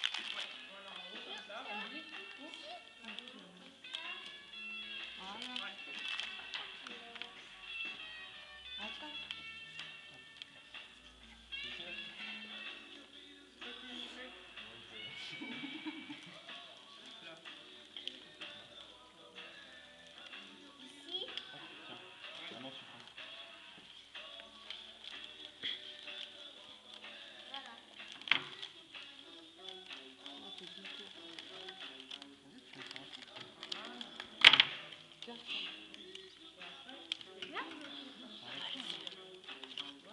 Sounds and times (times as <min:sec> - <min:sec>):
Music: 0:00.0 - 0:40.1.